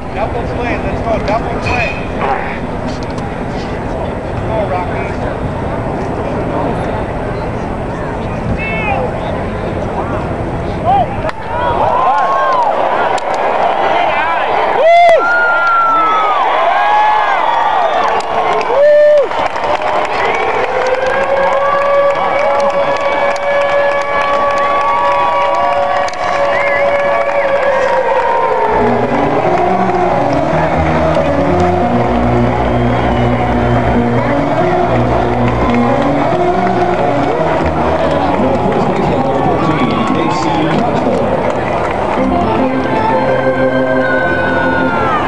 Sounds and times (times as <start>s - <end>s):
Music: 20.4s - 45.2s
Speech: 38.2s - 41.3s.